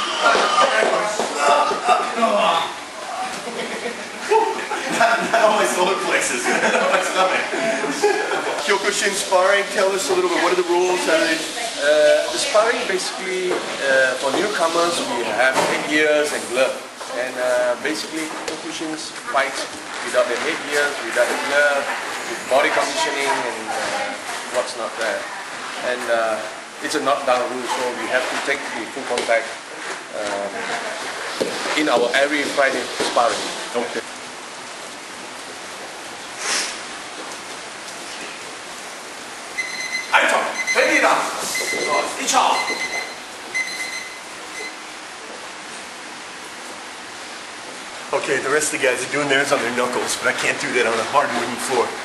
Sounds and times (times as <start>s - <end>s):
Inside, large room or hall: 0.0s - 52.0s.